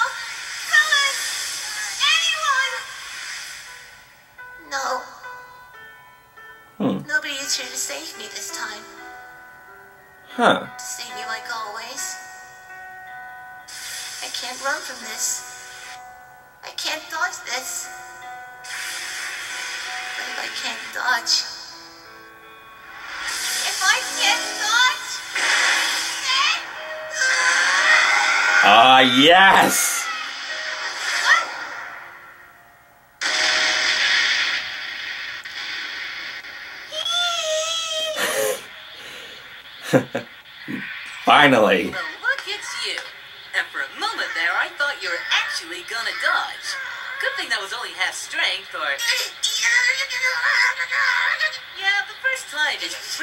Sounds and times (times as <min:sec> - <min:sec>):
Music: 0:00.0 - 0:53.2
Speech: 0:06.8 - 0:07.1, 0:10.3 - 0:11.8, 0:28.6 - 0:30.0, 0:39.9 - 0:46.5.